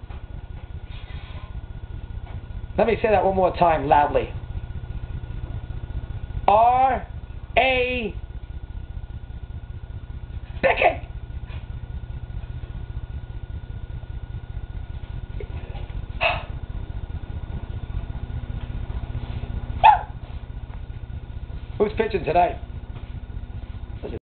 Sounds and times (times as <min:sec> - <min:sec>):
Speech: 0:02.8 - 0:04.4, 0:06.5 - 0:08.2, 0:21.8 - 0:22.6.